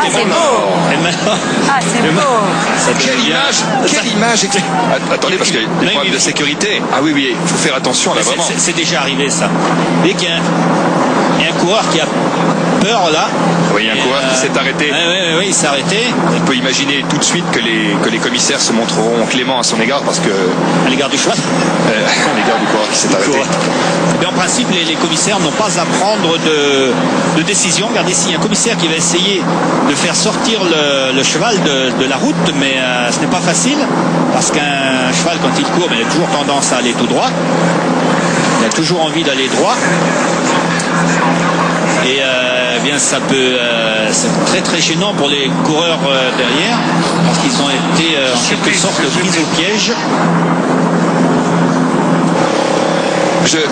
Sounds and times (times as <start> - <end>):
Speech: 0.0 - 50.4, 53.3 - 53.7.